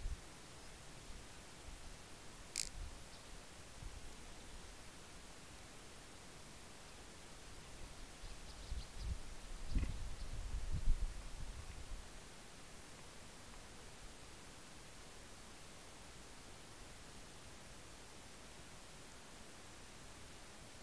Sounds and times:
Rustling leaves: 0.0s - 15.4s.

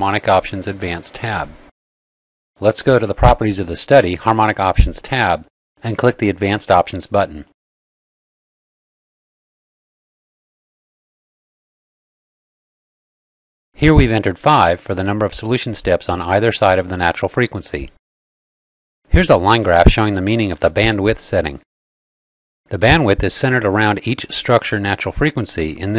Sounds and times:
Speech: 0.0s - 1.6s, 2.6s - 7.6s, 13.8s - 18.0s, 19.1s - 21.7s, 22.7s - 25.9s.

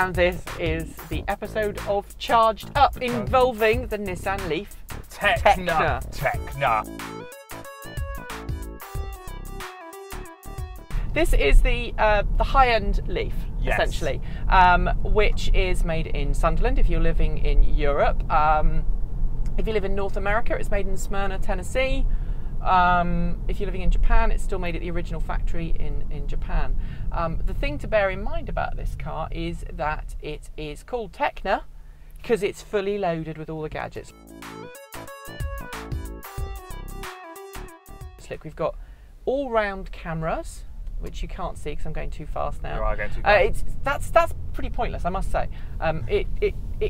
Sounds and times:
Speech: 0.0s - 6.8s, 11.2s - 18.8s, 19.6s - 22.0s, 22.6s - 34.1s, 38.2s - 46.9s
Music: 0.0s - 14.2s, 33.8s - 38.5s.

